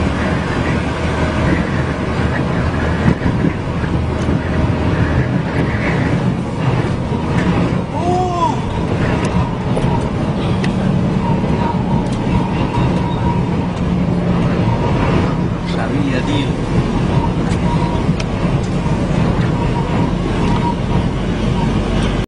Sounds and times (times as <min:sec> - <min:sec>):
Truck: 0:00.0 - 0:22.2
Speech: 0:15.6 - 0:16.6.